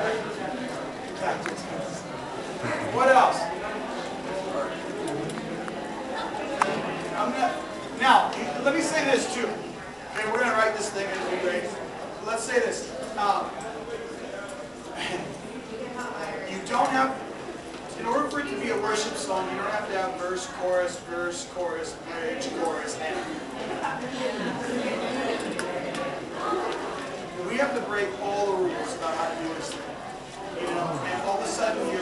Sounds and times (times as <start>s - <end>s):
Speech: 0.0s - 5.0s, 6.1s - 17.3s, 17.9s - 32.0s.